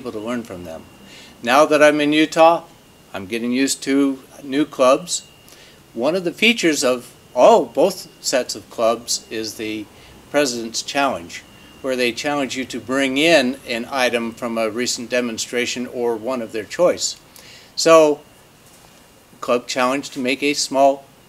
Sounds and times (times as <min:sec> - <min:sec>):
Speech: 0:00.0 - 0:05.3, 0:06.0 - 0:17.2, 0:17.8 - 0:18.2, 0:19.4 - 0:21.1.